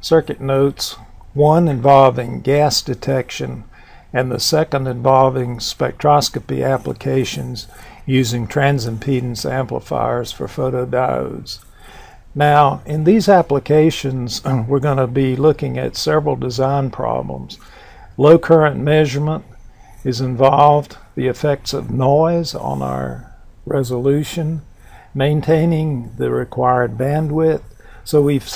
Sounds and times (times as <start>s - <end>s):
Speech: 0.0s - 11.7s, 12.4s - 17.6s, 18.2s - 28.5s.